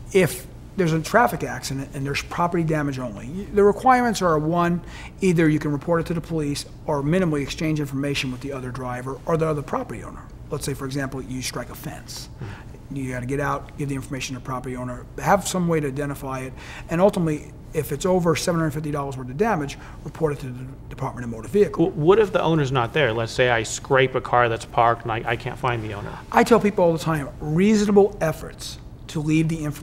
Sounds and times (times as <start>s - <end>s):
Speech: 0.1s - 29.8s.